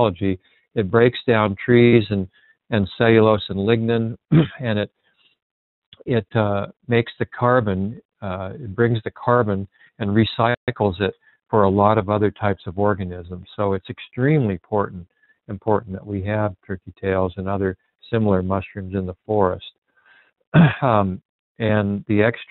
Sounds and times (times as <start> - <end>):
Speech: 0.0 - 4.9, 6.0 - 19.8, 20.6 - 22.5.